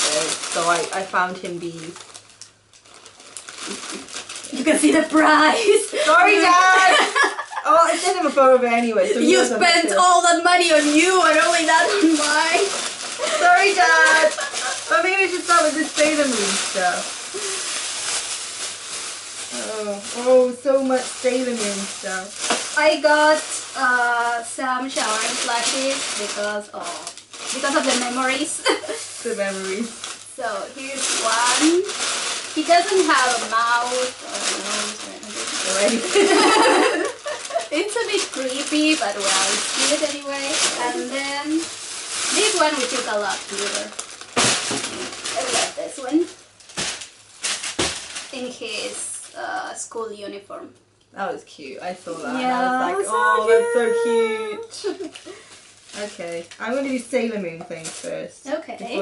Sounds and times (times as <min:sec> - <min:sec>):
Speech: 0:00.0 - 0:02.0, 0:04.5 - 0:17.1, 0:19.5 - 0:28.6, 0:29.2 - 0:31.9, 0:32.6 - 0:36.2, 0:37.7 - 0:41.7, 0:42.3 - 0:43.9, 0:48.4 - 0:54.7, 0:56.0 - 0:59.0
Inside, small room: 0:00.0 - 0:59.0.